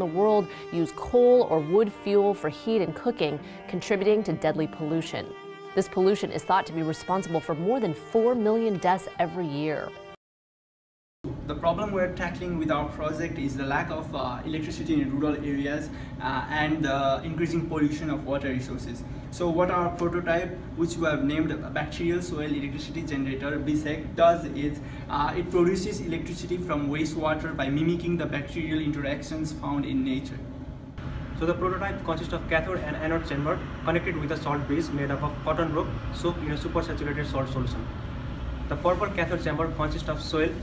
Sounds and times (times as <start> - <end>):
Speech: 0.0 - 9.9, 11.5 - 30.4, 31.4 - 37.8, 38.7 - 40.6.